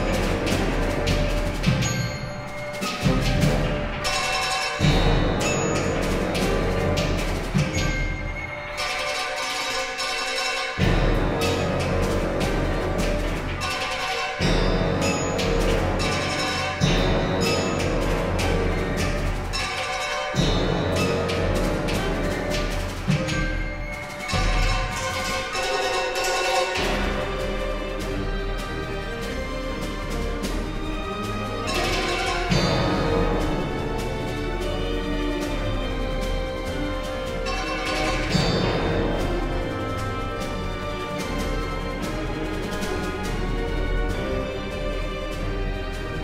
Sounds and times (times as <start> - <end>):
Orchestra: 0.0 - 46.2.